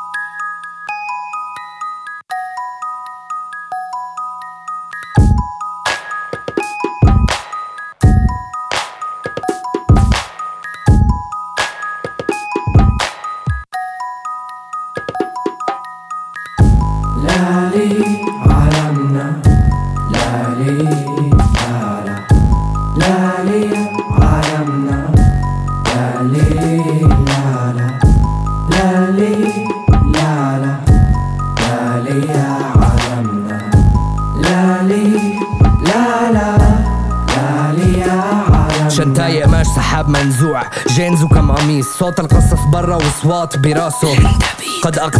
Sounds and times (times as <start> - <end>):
Music: 0.0 - 45.1.